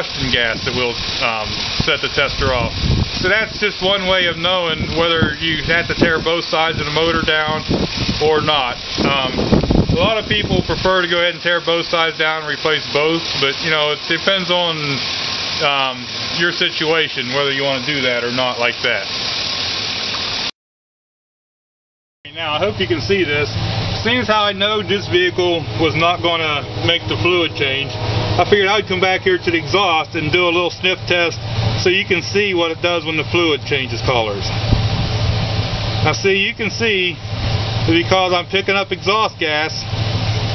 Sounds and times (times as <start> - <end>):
Speech: 0.0 - 9.4, 10.0 - 19.1, 22.3 - 34.6, 36.0 - 37.2, 37.9 - 39.9
Engine: 0.0 - 20.5, 22.3 - 40.5
Outside, urban or manmade: 0.0 - 20.6, 22.2 - 40.5
Car: 22.3 - 40.5.